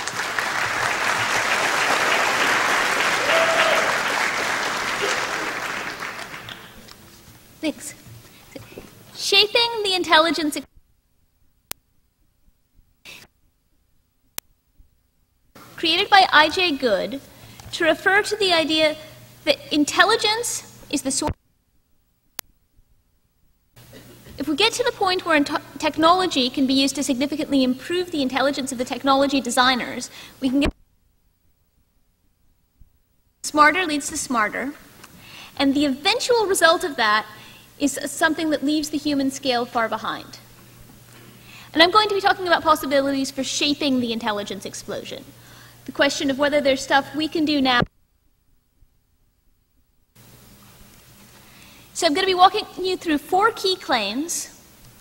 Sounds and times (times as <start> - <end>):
Speech: 7.6 - 8.0, 9.2 - 10.7, 15.8 - 21.4, 24.4 - 30.8, 33.4 - 34.8, 35.6 - 40.4, 41.7 - 45.3, 45.9 - 47.9, 52.0 - 54.6.